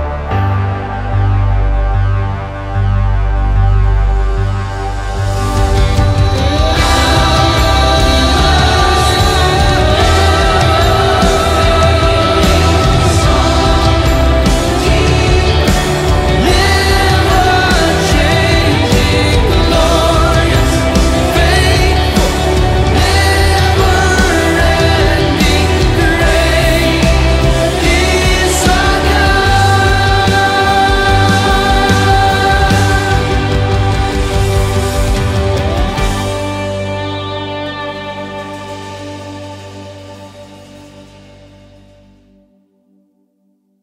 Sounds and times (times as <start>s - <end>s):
Music: 0.0s - 43.8s
Singing: 5.7s - 34.6s.